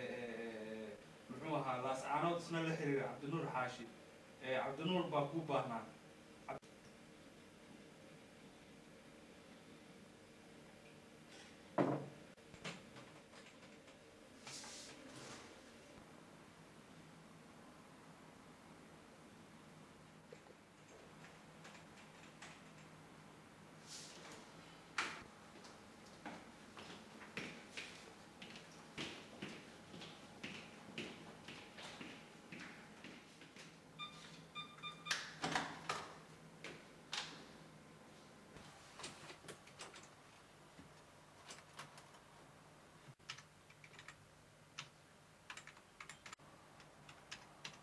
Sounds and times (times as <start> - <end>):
Speech: 0.0 - 6.6.